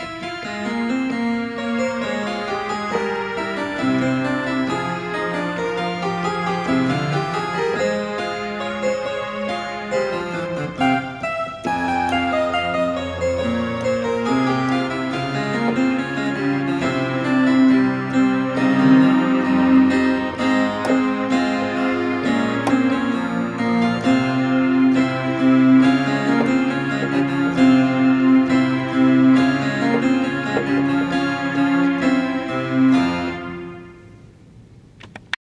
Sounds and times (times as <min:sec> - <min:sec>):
Electric piano: 0:00.0 - 0:34.5.